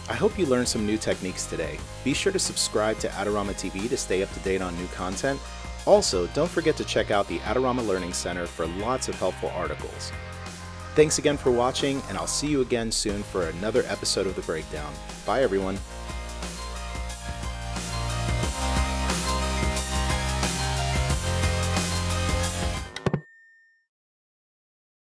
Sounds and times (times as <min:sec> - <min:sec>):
Speech: 0:00.0 - 0:10.1, 0:11.0 - 0:15.8
Music: 0:00.0 - 0:23.2.